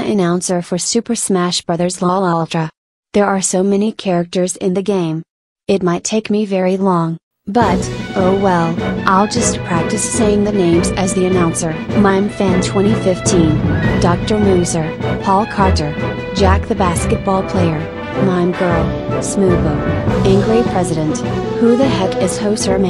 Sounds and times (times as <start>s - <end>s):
Speech: 0.0s - 22.9s
Music: 7.5s - 22.9s.